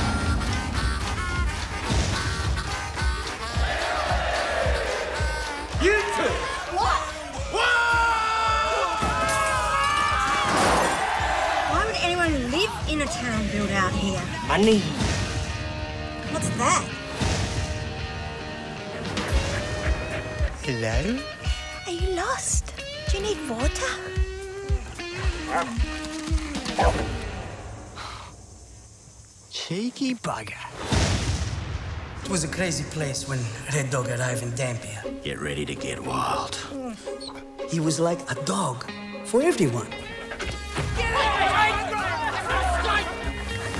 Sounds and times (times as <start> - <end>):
Music: 0.0 - 28.4, 30.5 - 43.7
Bow-wow: 25.2 - 26.0, 26.7 - 27.1.